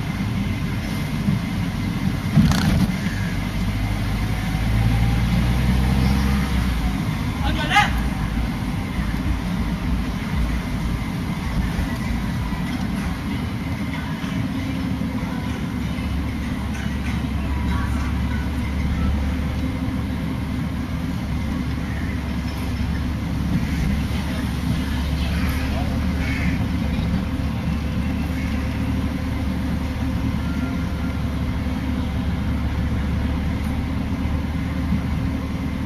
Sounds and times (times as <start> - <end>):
Motor vehicle (road): 0.0 - 35.8
Speech: 7.4 - 8.2.